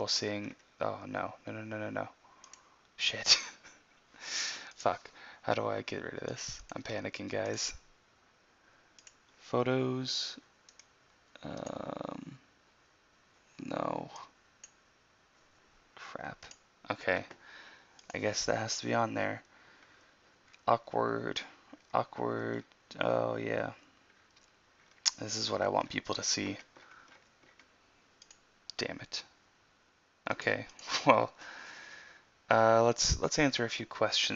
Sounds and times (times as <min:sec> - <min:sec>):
Speech: 0:00.0 - 0:02.2, 0:03.0 - 0:03.6, 0:04.8 - 0:07.8, 0:09.4 - 0:10.4, 0:11.4 - 0:12.4, 0:13.6 - 0:14.3, 0:16.0 - 0:17.4, 0:18.1 - 0:19.4, 0:20.6 - 0:23.8, 0:25.1 - 0:26.7, 0:28.7 - 0:29.4, 0:30.3 - 0:31.4, 0:32.5 - 0:34.3
Inside, small room: 0:00.0 - 0:34.3
Clicking: 0:02.4 - 0:02.6, 0:09.0 - 0:09.2, 0:10.7 - 0:10.9, 0:14.2 - 0:14.8, 0:27.2 - 0:28.4.